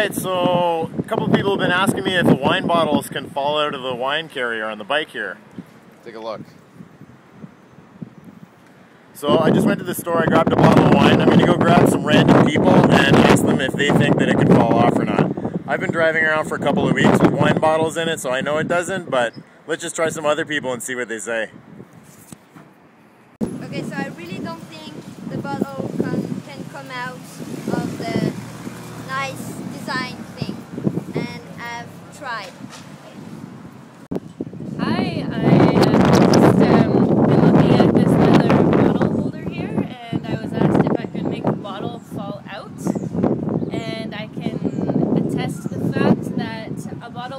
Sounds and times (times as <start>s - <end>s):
Speech: 6.0s - 6.5s, 23.6s - 28.4s, 34.8s - 43.0s, 43.7s - 47.3s.